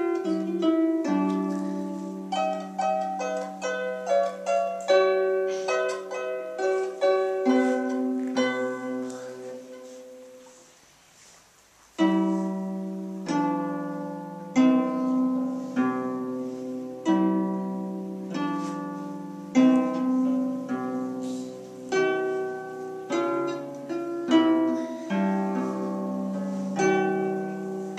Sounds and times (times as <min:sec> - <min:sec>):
Plucked string instrument: 0:00.0 - 0:10.6, 0:12.0 - 0:27.9.